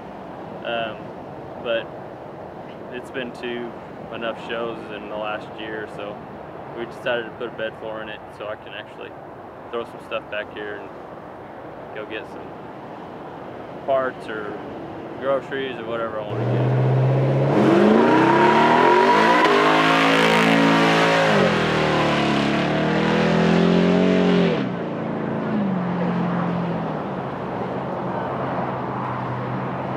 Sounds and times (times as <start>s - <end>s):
Race car, auto racing: 14.1s - 29.9s.